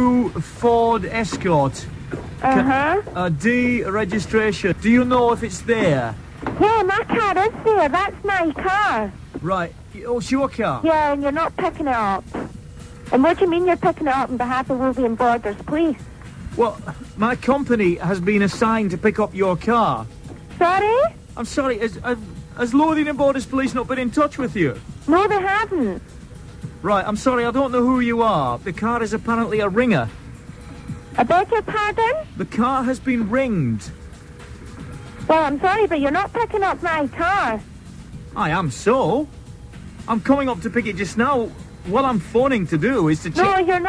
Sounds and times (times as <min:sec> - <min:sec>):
Speech: 0:00.0 - 0:12.3, 0:13.1 - 0:16.0, 0:16.6 - 0:26.0, 0:26.8 - 0:30.1, 0:31.2 - 0:34.0, 0:35.3 - 0:37.6, 0:38.4 - 0:39.3, 0:40.1 - 0:43.8.